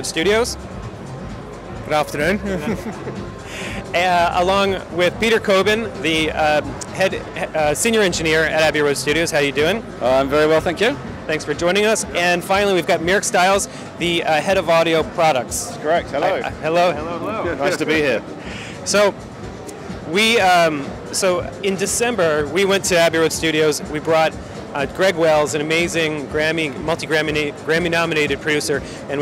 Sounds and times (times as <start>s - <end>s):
Music: 0.0s - 29.2s.